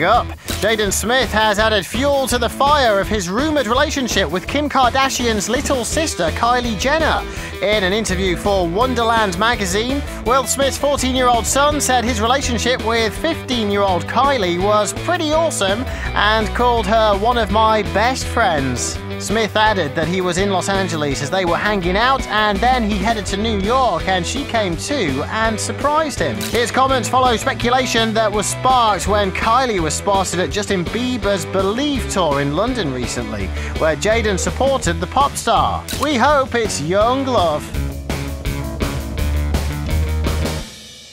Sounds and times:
Speech: 0.0s - 37.8s
Music: 0.0s - 41.1s.

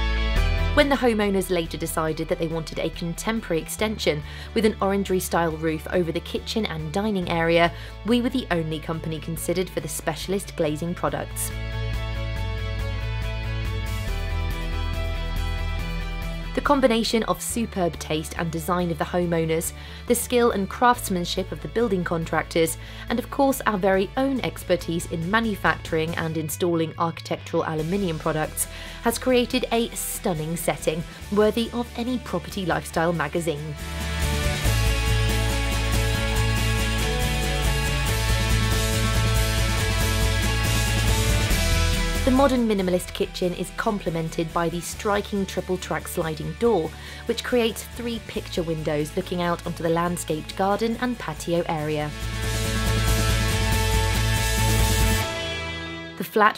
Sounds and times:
Music: 0.0s - 56.5s
Speech: 0.8s - 11.5s, 16.6s - 33.8s, 42.2s - 52.1s, 56.2s - 56.5s.

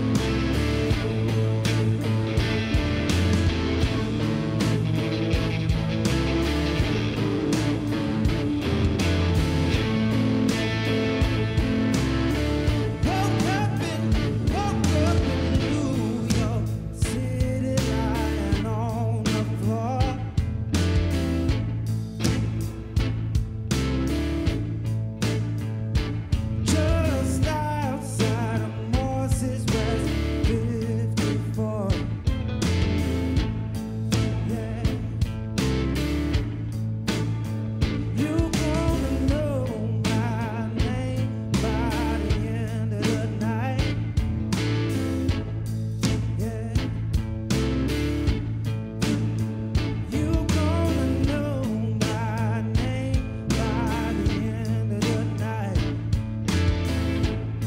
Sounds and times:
Electric guitar: 0.0s - 57.6s.

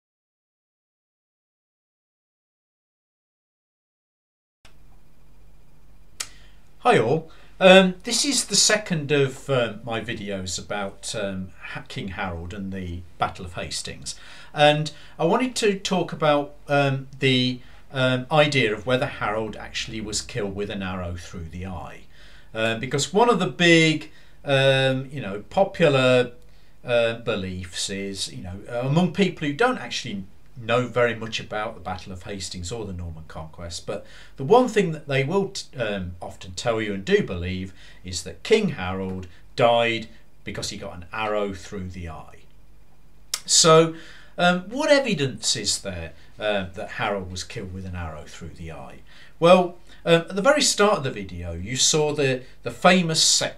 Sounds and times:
Speech: 6.8s - 42.5s, 43.4s - 53.5s.

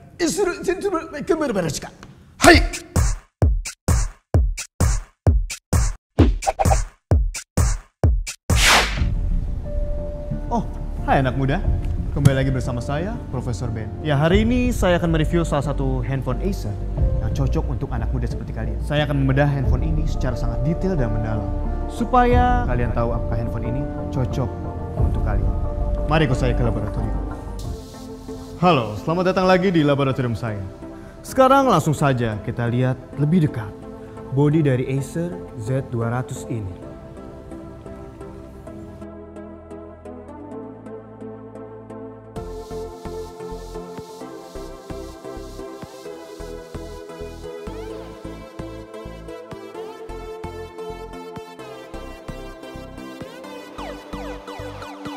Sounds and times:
Speech: 0.2s - 2.8s, 10.5s - 21.4s, 22.0s - 24.5s, 26.1s - 27.2s, 28.6s - 30.7s, 31.3s - 36.8s
Music: 2.4s - 55.1s.

